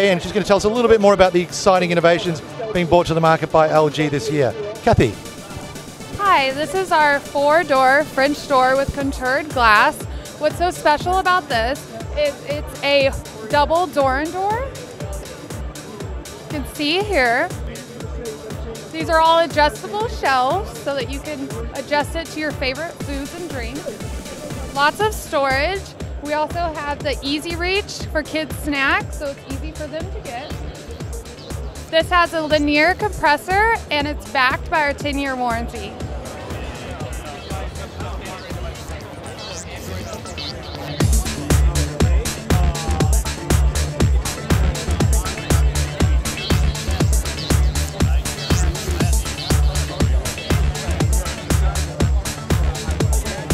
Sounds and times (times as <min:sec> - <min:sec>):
Speech: 0:00.0 - 0:05.6, 0:06.2 - 0:15.4, 0:16.5 - 0:23.8, 0:24.5 - 0:30.6, 0:31.9 - 0:43.2
Music: 0:00.0 - 0:53.5.